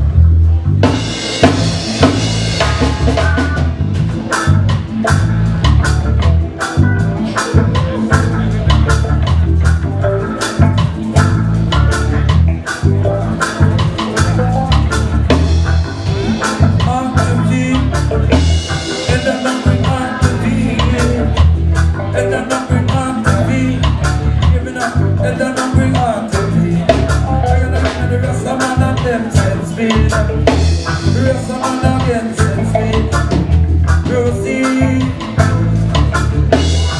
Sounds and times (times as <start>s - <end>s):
Music: 0.0s - 36.9s.